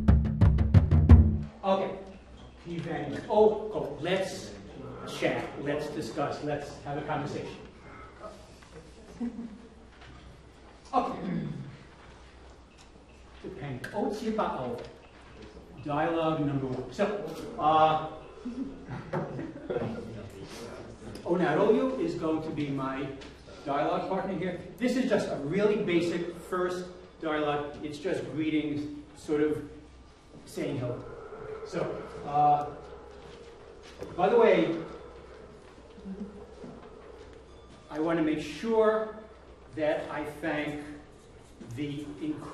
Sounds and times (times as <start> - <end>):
Speech: 1.6 - 8.4, 10.9 - 11.7, 13.4 - 14.8, 15.8 - 18.2, 20.0 - 29.7, 30.5 - 31.0, 31.7 - 32.8, 34.2 - 35.0, 37.9 - 39.2, 39.8 - 41.0, 41.6 - 42.5.